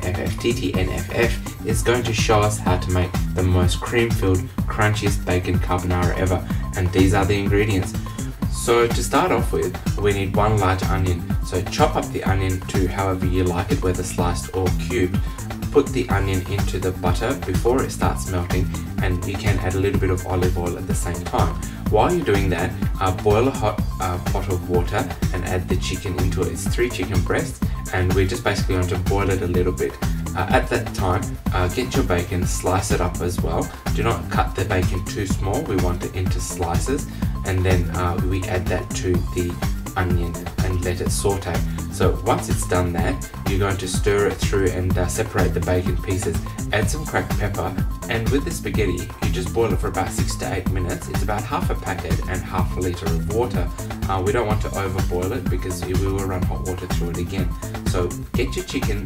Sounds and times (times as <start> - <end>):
Music: 0.0 - 59.0
Speech: 0.0 - 59.0.